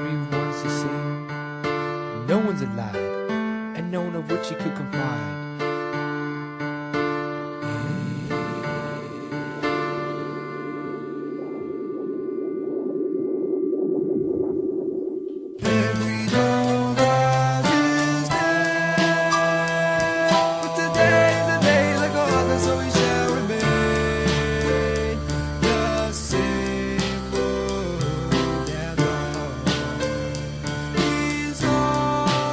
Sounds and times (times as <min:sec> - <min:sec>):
Speech: 0:00.0 - 0:01.2, 0:02.2 - 0:03.1, 0:03.8 - 0:05.4
Music: 0:00.0 - 0:11.3, 0:15.6 - 0:32.5.